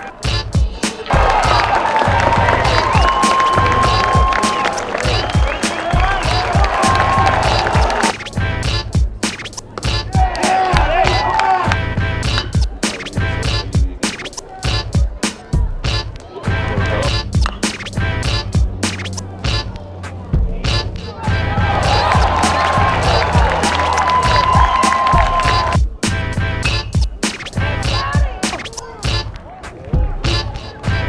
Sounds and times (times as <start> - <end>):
Music: 0.0 - 31.0.